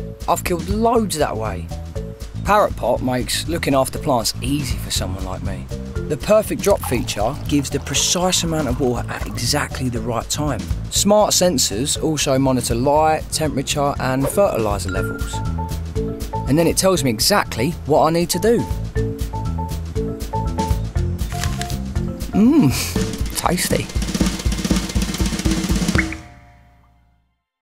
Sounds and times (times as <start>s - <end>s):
Music: 0.0s - 27.6s
Speech: 0.3s - 1.7s, 2.4s - 15.4s, 16.5s - 18.7s, 23.3s - 23.9s.